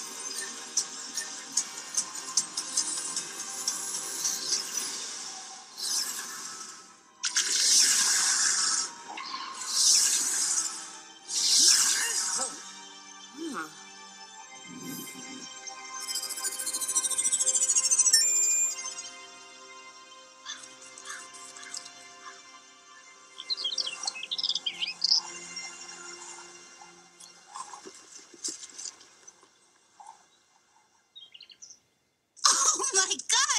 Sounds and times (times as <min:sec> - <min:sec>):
Music: 0:00.0 - 0:33.5
Outside, rural or natural: 0:14.6 - 0:33.3.